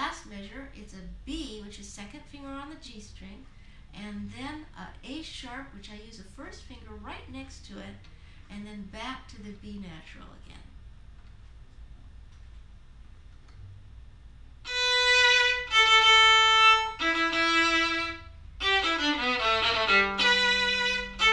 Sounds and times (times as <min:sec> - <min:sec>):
Speech: 0:00.0 - 0:10.8.